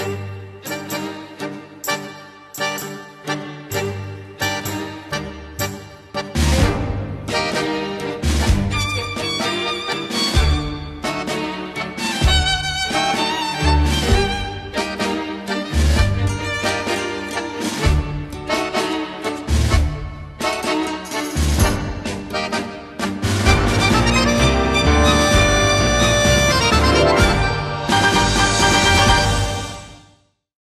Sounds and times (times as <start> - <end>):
Music: 0.0 - 30.5.